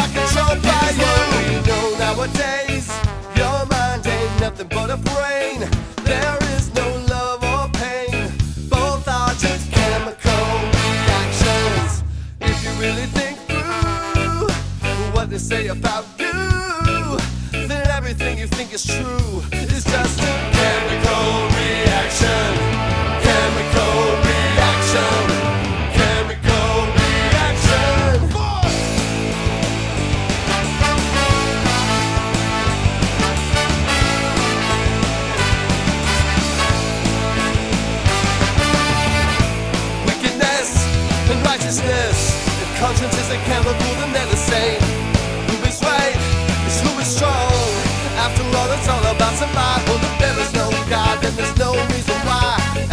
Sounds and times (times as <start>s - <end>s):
Funk: 0.0s - 52.9s
Jazz: 0.0s - 52.9s.